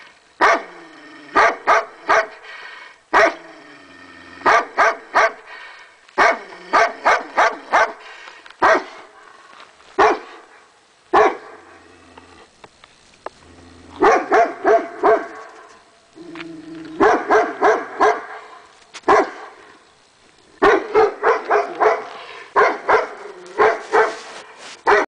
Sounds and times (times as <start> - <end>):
Bow-wow: 0.4 - 0.8, 1.4 - 2.4, 3.2 - 3.4, 4.4 - 5.4, 6.2 - 8.0, 8.6 - 9.0, 10.0 - 10.4, 11.1 - 11.6, 14.0 - 15.4, 17.0 - 18.4, 19.1 - 19.5, 20.6 - 25.0.